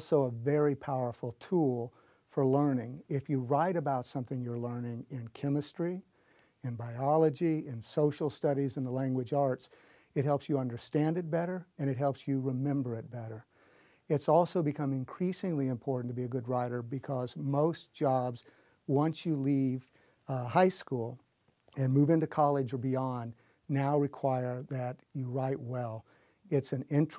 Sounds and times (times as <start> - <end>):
Speech: 0.0 - 13.5, 14.1 - 27.1.